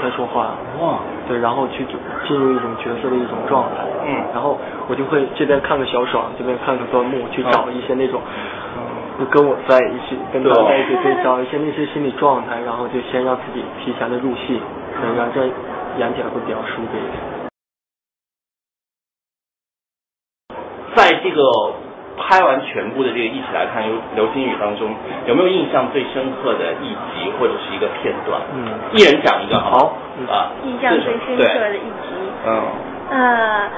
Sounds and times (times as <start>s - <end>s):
Speech: 0.0s - 17.2s, 20.9s - 33.7s.